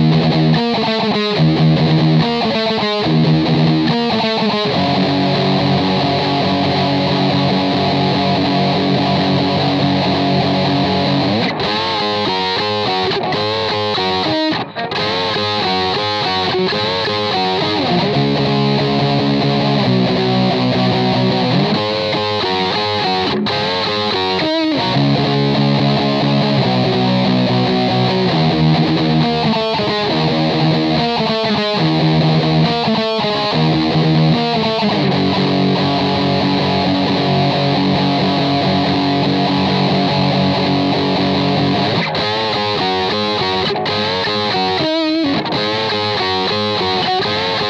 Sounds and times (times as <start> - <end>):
Electric guitar: 0.0 - 47.6.